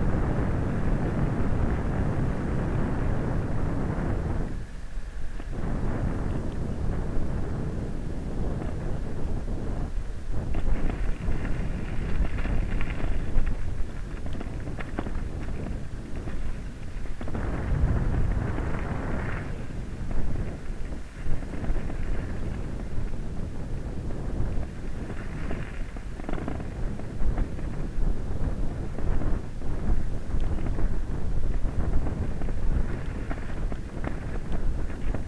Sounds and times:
Vehicle: 0.0 - 35.2.

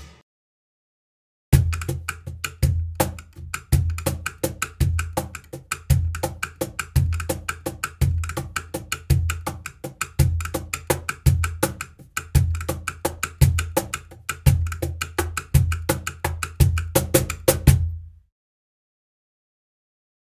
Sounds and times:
Music: 0.0 - 0.2, 1.6 - 18.3.

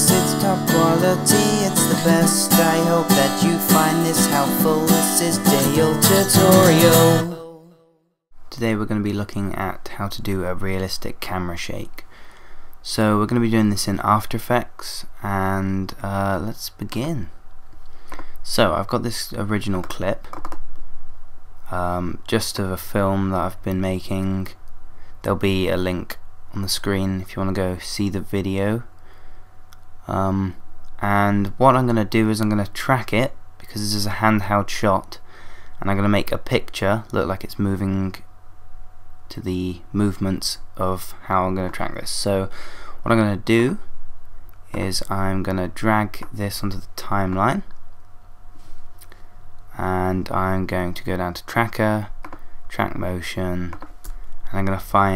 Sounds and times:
Speech: 8.5 - 12.1, 12.8 - 17.4, 18.4 - 20.4, 21.7 - 24.6, 25.2 - 28.9, 30.0 - 35.2, 35.8 - 38.3, 39.3 - 43.9, 44.7 - 47.8, 49.7 - 53.8, 54.5 - 55.1.

